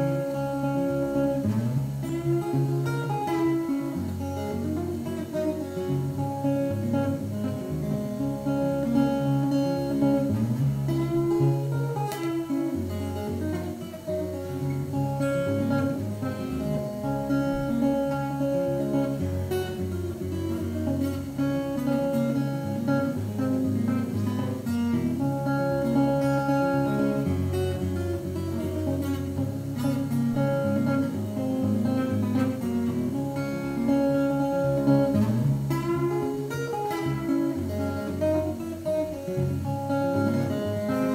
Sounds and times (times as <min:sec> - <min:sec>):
Strum: 0:00.0 - 0:41.1.